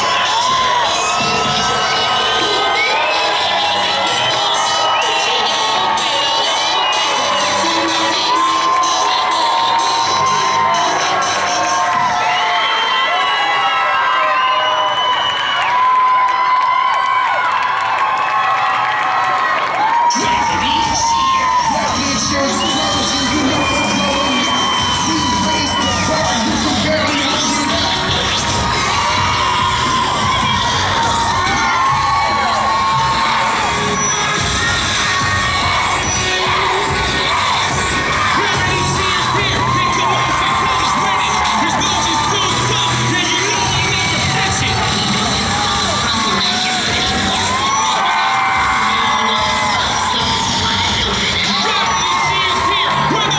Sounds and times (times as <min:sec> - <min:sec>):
Music: 0:00.0 - 0:17.4, 0:18.1 - 0:53.3.